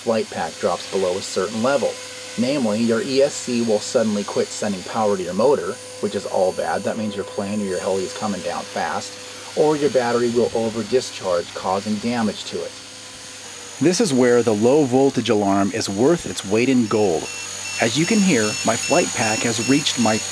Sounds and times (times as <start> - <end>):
Speech: 0.0 - 12.8, 13.8 - 20.3.